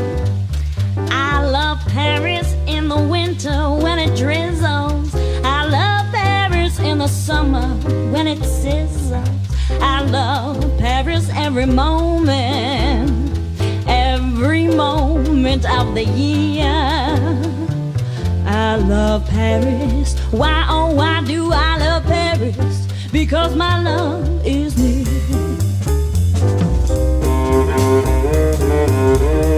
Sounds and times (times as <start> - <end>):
Musical instrument: 24.8 - 29.5.